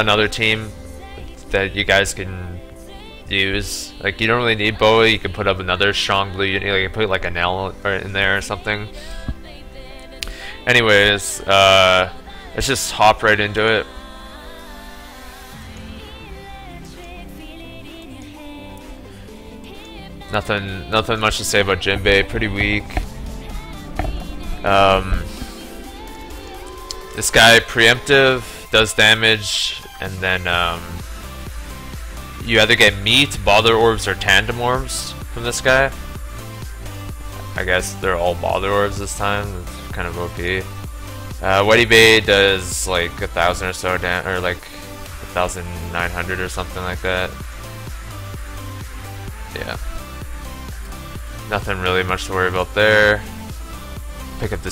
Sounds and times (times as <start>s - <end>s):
Speech: 0.0s - 0.7s, 1.4s - 2.6s, 3.3s - 8.9s, 10.7s - 13.9s, 20.3s - 23.0s, 24.6s - 25.3s, 27.2s - 31.0s, 32.4s - 36.0s, 37.6s - 40.7s, 41.4s - 44.7s, 45.4s - 47.4s, 49.5s - 49.8s, 51.5s - 53.3s, 54.4s - 54.7s
Music: 0.0s - 54.7s.